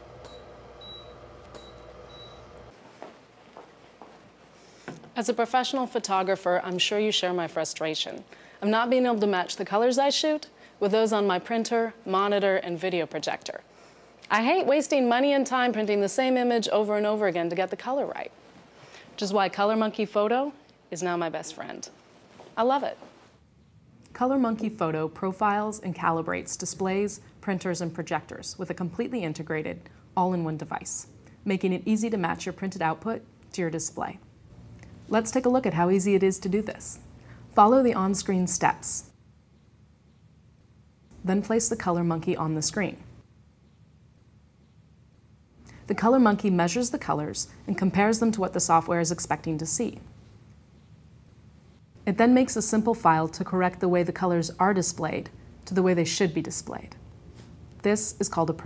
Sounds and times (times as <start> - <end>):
Speech: 5.2 - 13.7, 14.3 - 18.4, 19.2 - 22.0, 22.6 - 23.0, 24.1 - 34.2, 35.1 - 39.1, 41.2 - 43.1, 45.9 - 50.1, 52.0 - 57.0, 57.8 - 58.6.